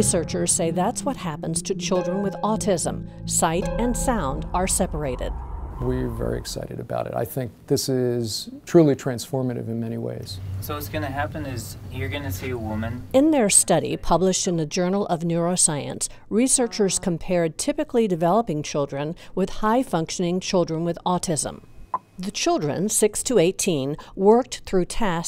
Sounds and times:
Speech: 0:15.6 - 0:18.0.

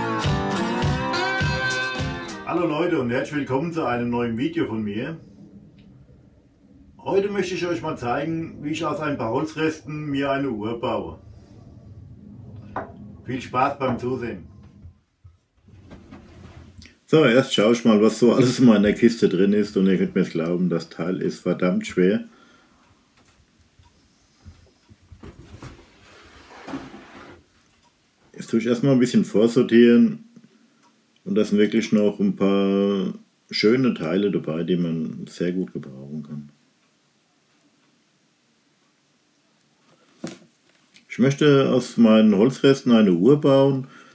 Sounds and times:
Speech: 0:02.5 - 0:05.3, 0:07.0 - 0:11.2, 0:13.2 - 0:14.6, 0:17.1 - 0:22.3, 0:28.3 - 0:30.3, 0:31.2 - 0:36.6, 0:41.0 - 0:43.9.

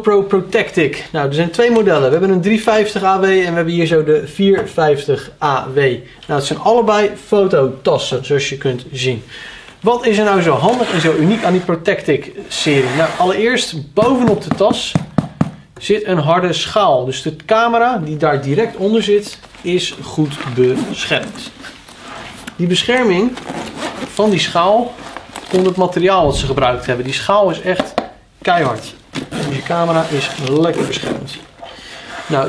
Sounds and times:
Speech: 0:00.0 - 0:15.1, 0:15.8 - 0:21.8, 0:22.6 - 0:23.5, 0:24.1 - 0:31.5, 0:32.3 - 0:32.4.

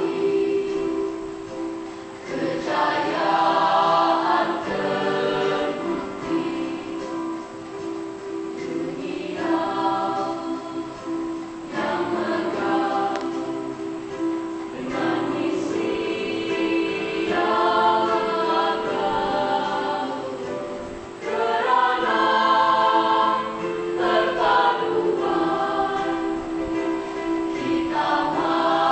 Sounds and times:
A capella: 0:00.0 - 0:07.6, 0:08.5 - 0:28.9
Choir: 0:00.0 - 0:28.9.

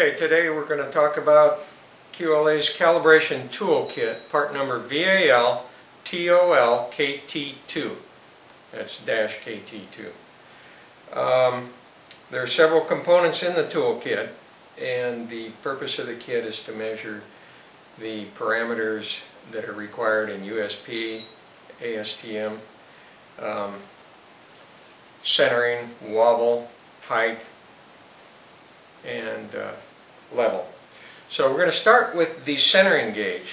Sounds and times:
Speech: 0:00.0 - 0:08.1, 0:08.7 - 0:10.2, 0:11.1 - 0:17.3, 0:18.0 - 0:22.7, 0:23.4 - 0:23.9, 0:25.2 - 0:27.6, 0:29.0 - 0:33.5.

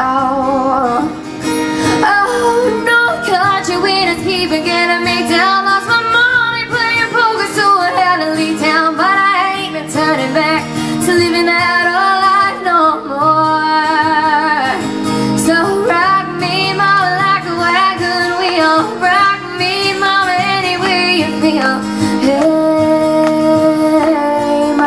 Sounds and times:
Guitar: 0:00.0 - 0:24.8
Inside, large room or hall: 0:00.0 - 0:24.8.

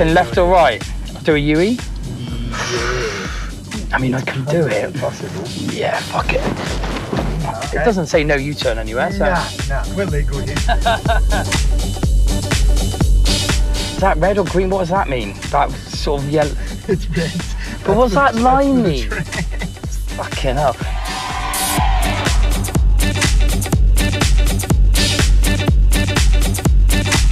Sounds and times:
Music: 0:00.0 - 0:27.3
Speech: 0:07.5 - 0:10.6, 0:14.0 - 0:19.3.

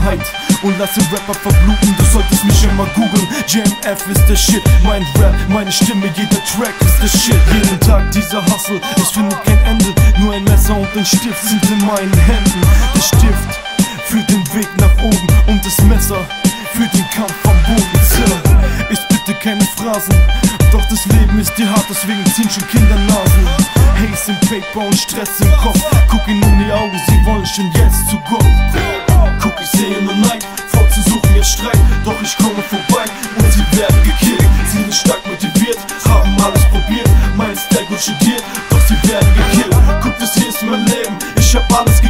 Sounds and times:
Music: 0:00.0 - 0:42.0.

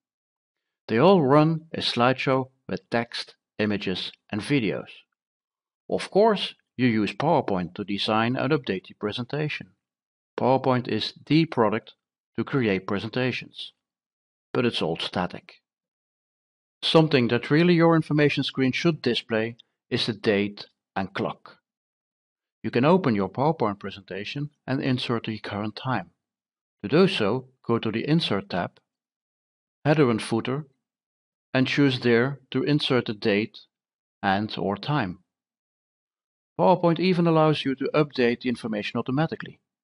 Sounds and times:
Speech: 0:00.9 - 0:05.1, 0:05.9 - 0:09.8, 0:10.4 - 0:13.8, 0:14.6 - 0:15.6, 0:16.8 - 0:21.6, 0:22.7 - 0:26.2, 0:26.8 - 0:28.8, 0:29.9 - 0:30.7, 0:31.6 - 0:35.3, 0:36.6 - 0:39.6.

